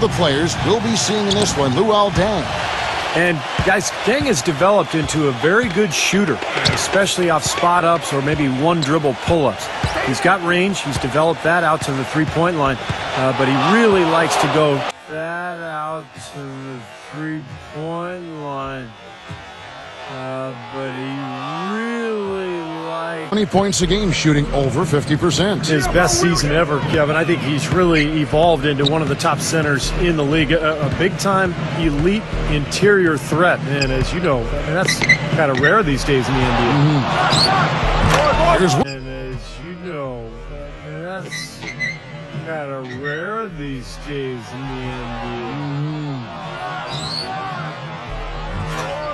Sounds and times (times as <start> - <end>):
Speech: 0.0 - 2.5, 3.2 - 19.0, 20.1 - 37.2, 38.1 - 41.7, 42.4 - 46.2
Music: 23.7 - 45.5, 46.3 - 49.1.